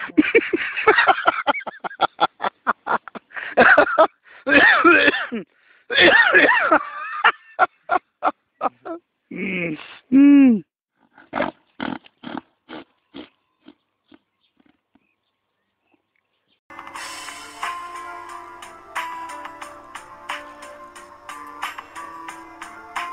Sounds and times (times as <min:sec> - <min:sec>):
Music: 0:16.7 - 0:23.1.